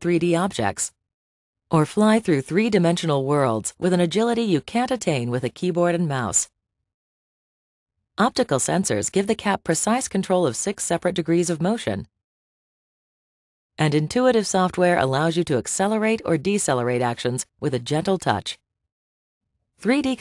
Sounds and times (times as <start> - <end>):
Speech: 0.0 - 0.9, 1.7 - 6.5, 8.2 - 12.1, 13.8 - 18.6, 19.8 - 20.2.